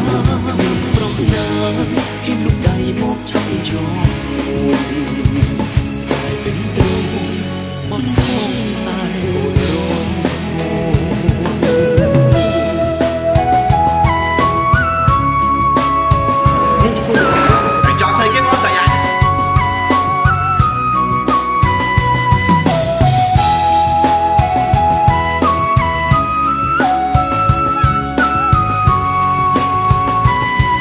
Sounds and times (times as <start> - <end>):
Music: 0.0 - 30.8
Speech: 16.6 - 19.3.